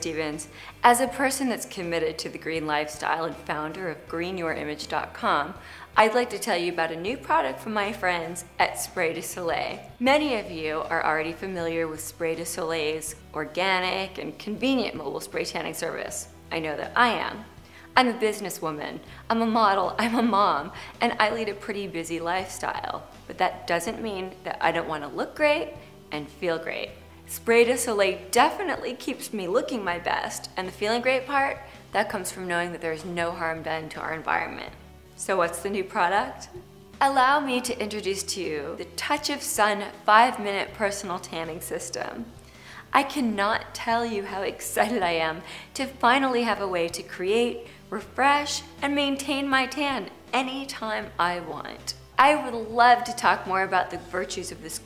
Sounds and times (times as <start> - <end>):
Speech: 0.0 - 42.3, 42.9 - 54.8
Music: 0.0 - 54.8.